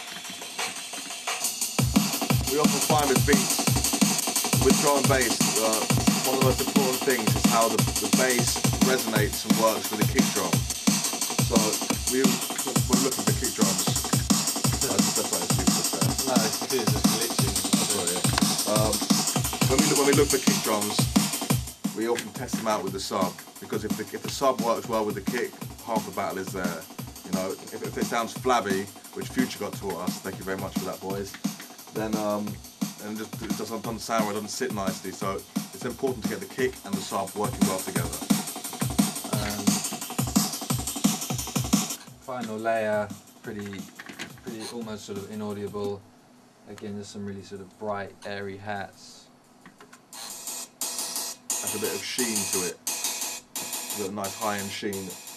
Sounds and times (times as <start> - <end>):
Drum and bass: 0.0 - 46.0, 51.5 - 52.8, 53.6 - 55.3
Speech: 2.4 - 3.6, 4.6 - 10.6, 11.5 - 14.0, 14.7 - 21.1, 22.0 - 38.2, 39.2 - 39.8, 42.3 - 46.0, 46.7 - 49.3, 51.6 - 52.8, 54.0 - 55.2.